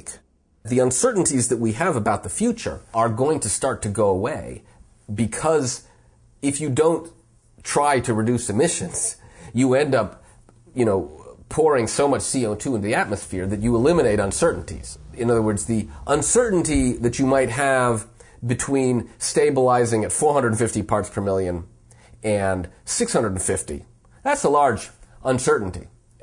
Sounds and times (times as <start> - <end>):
Speech: 0.0 - 26.0
Inside, small room: 0.0 - 26.2.